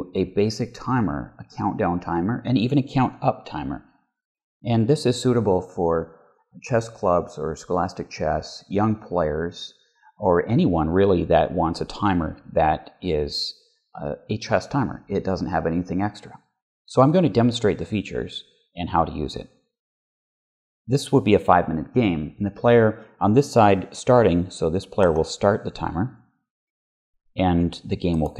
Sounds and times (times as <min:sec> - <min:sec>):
Speech: 0:00.0 - 0:03.8, 0:04.7 - 0:19.5, 0:20.9 - 0:26.1, 0:27.4 - 0:28.3.